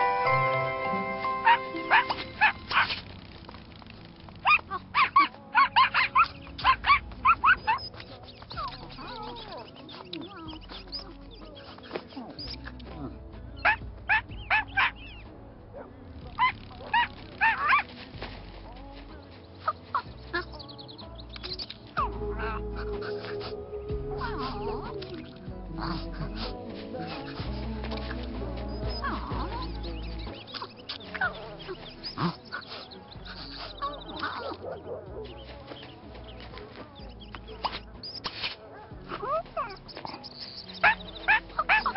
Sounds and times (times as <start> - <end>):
Music: 0.0 - 41.9
Bow-wow: 1.4 - 3.0, 33.8 - 35.4
Yip: 1.4 - 3.0, 4.4 - 7.8, 13.6 - 15.1, 16.4 - 17.9, 32.1 - 35.4, 39.1 - 41.9.